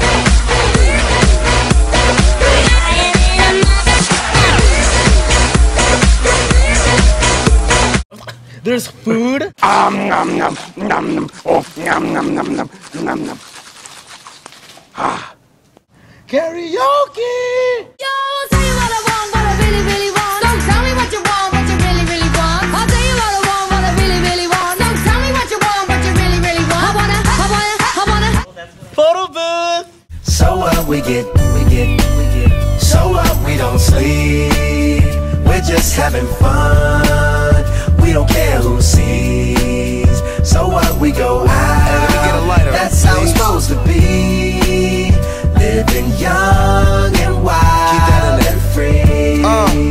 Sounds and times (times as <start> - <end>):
Music: 0.0 - 8.0, 18.3 - 28.4, 30.1 - 49.9
Speech: 8.2 - 13.4, 16.3 - 17.9, 28.4 - 30.0, 42.0 - 43.7.